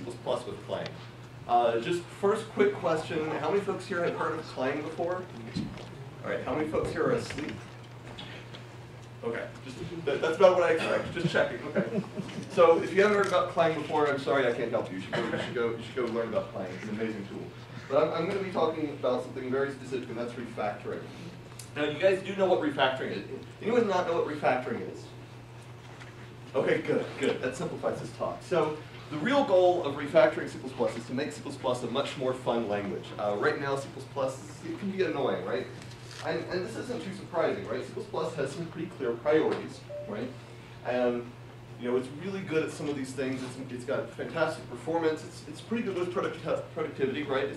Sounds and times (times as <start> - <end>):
Speech: 0.0 - 7.7, 9.2 - 25.2, 26.5 - 47.5.